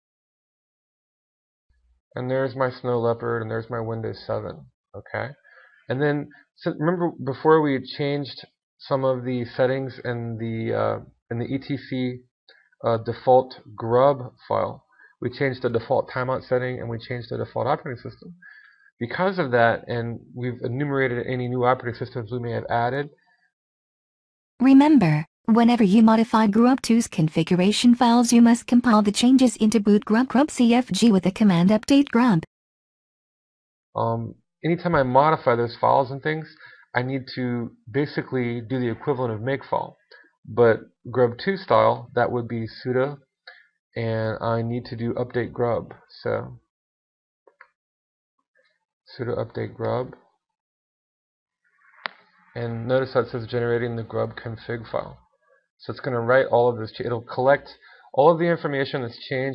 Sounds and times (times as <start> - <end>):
Speech: 2.2 - 12.2, 12.8 - 23.1, 24.6 - 32.5, 34.0 - 43.2, 44.0 - 46.6, 49.1 - 50.2, 52.6 - 55.2, 55.8 - 59.5.